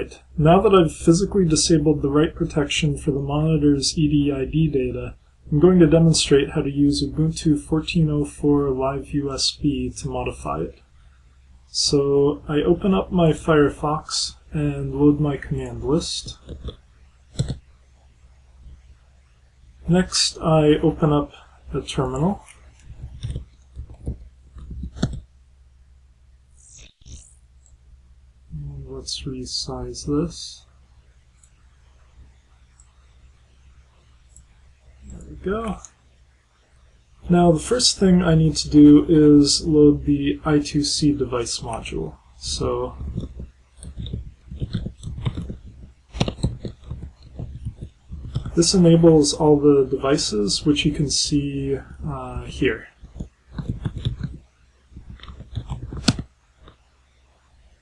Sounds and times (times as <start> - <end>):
Speech: 0.0 - 10.8, 11.7 - 16.4, 19.8 - 22.5, 28.5 - 30.7, 35.1 - 35.9, 37.3 - 43.2, 48.5 - 53.0.